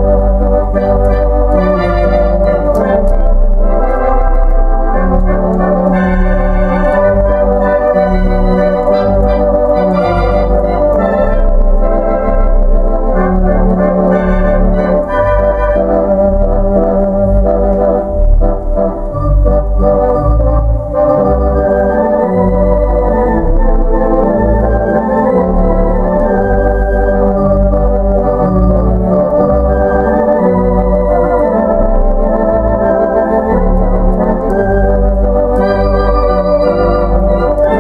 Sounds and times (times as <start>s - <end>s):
Electronic organ: 0.0s - 37.8s.